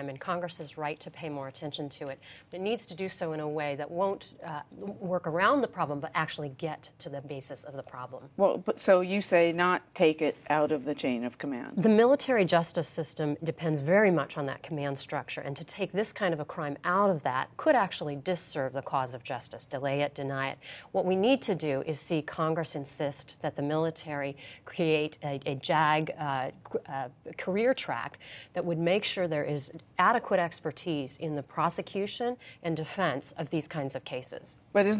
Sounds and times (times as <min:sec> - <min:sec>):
Female speech, woman speaking: 0:00.0 - 0:34.9.